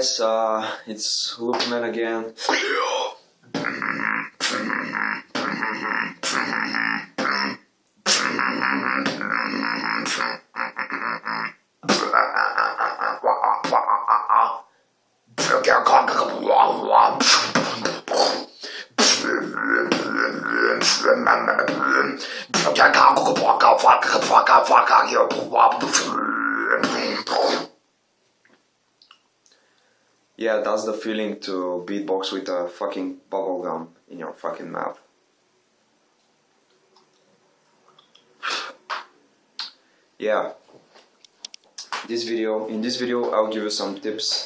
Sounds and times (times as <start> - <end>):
Speech: 0.0 - 3.2, 30.4 - 35.1, 40.2 - 40.6, 42.1 - 44.4.